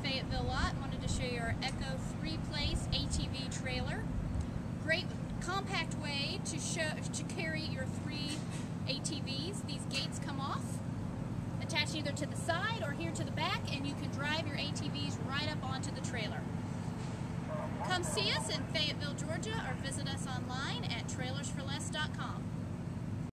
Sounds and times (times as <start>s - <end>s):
Speech: 0.0s - 4.0s, 4.8s - 10.8s, 11.6s - 16.5s, 17.9s - 22.4s.